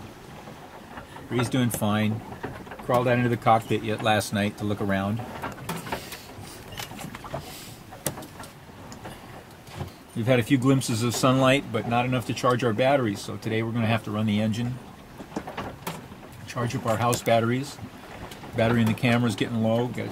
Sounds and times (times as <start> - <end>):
Speech: 1.3 - 2.2, 2.9 - 5.2, 10.2 - 14.8, 16.5 - 17.8, 18.6 - 20.1.